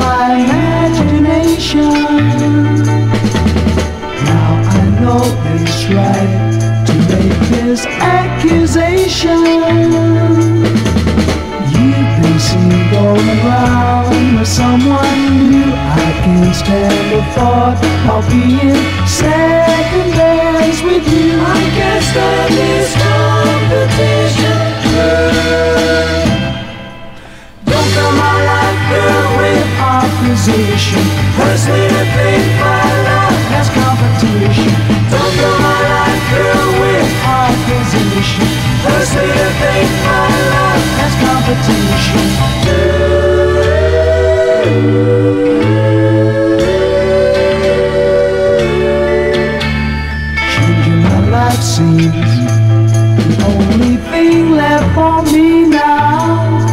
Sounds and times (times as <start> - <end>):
Music: 0.0 - 56.7.